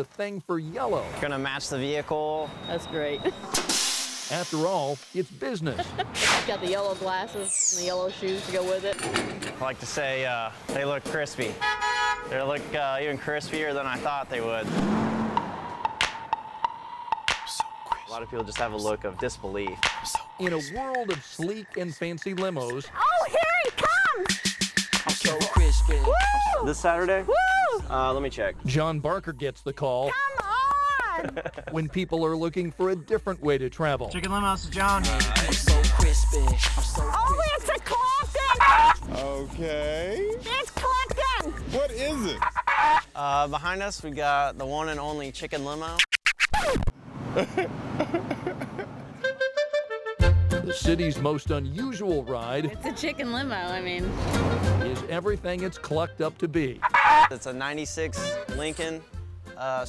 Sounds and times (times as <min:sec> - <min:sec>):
Music: 0:15.8 - 0:31.2, 0:31.9 - 0:42.5, 0:43.1 - 0:46.0, 0:49.2 - 0:59.8.